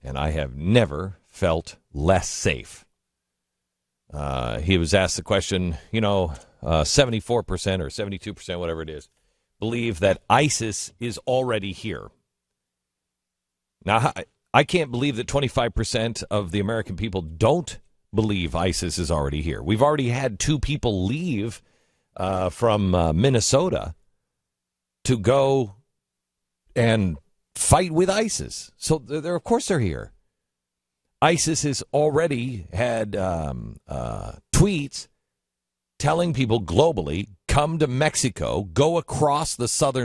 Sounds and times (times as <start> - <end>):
Male speech, man speaking: 0.0 - 2.9, 4.2 - 12.1, 13.8 - 21.6, 22.2 - 24.0, 25.0 - 25.8, 26.8 - 30.1, 31.2 - 35.1, 36.0 - 40.0
Narration, monologue: 0.0 - 40.0.